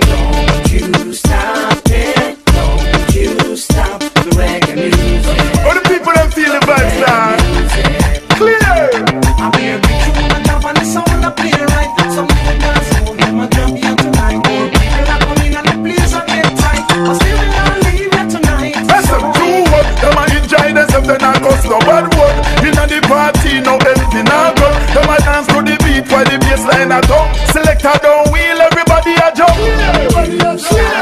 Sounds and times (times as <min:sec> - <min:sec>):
Afrobeat: 0:00.0 - 0:31.0.